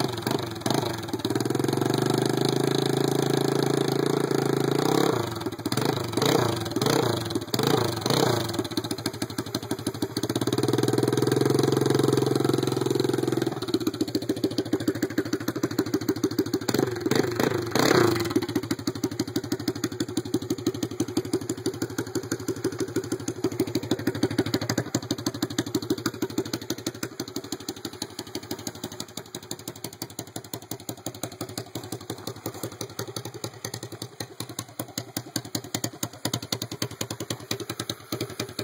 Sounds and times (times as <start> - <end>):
Motorcycle: 0.0 - 38.6
Outside, urban or manmade: 0.0 - 38.6.